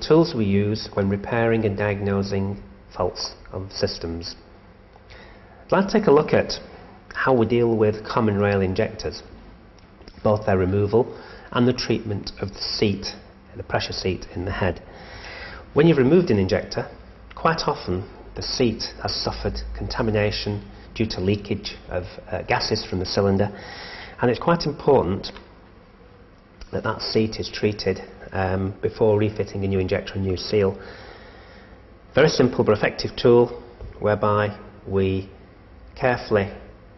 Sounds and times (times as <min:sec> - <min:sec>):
Speech: 0:00.0 - 0:04.5, 0:05.7 - 0:09.4, 0:10.1 - 0:14.9, 0:15.7 - 0:23.6, 0:24.2 - 0:25.5, 0:26.6 - 0:30.8, 0:32.1 - 0:35.4, 0:36.0 - 0:36.8.